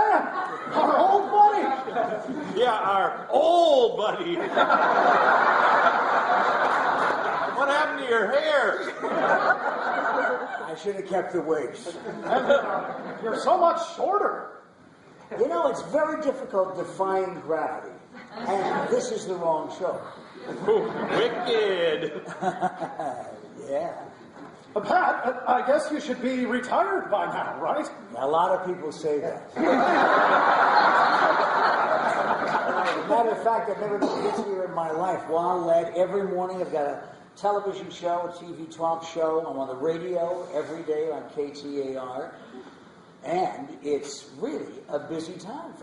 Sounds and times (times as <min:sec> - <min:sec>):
Speech: 0:00.0 - 0:01.9, 0:02.5 - 0:04.5, 0:07.6 - 0:09.0, 0:10.6 - 0:12.0, 0:13.2 - 0:14.6, 0:15.3 - 0:20.1, 0:21.1 - 0:22.2, 0:23.0 - 0:24.2, 0:24.8 - 0:29.8, 0:32.9 - 0:42.4, 0:43.2 - 0:45.8
Inside, large room or hall: 0:00.0 - 0:45.8.